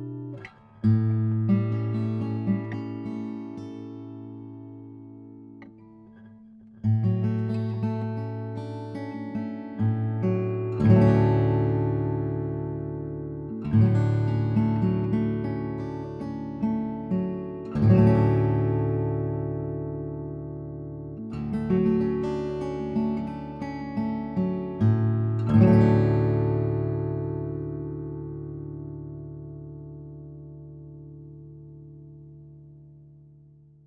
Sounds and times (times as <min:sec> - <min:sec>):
Acoustic guitar: 0:00.0 - 0:33.8.